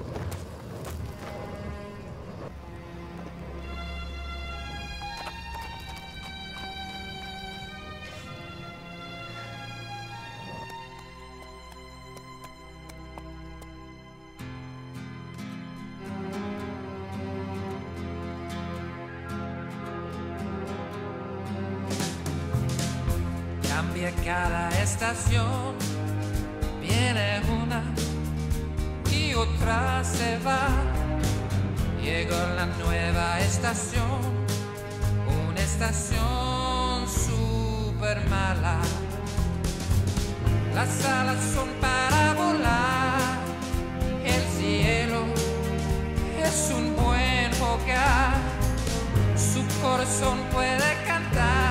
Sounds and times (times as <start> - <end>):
Music: 1.1 - 51.7.